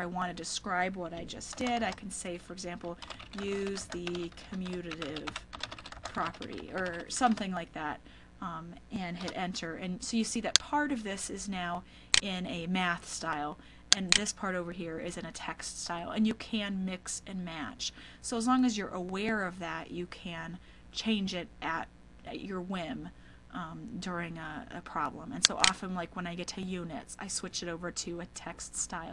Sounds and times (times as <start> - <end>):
Computer keyboard: 1.2 - 2.0, 2.8 - 7.5, 9.2 - 9.4.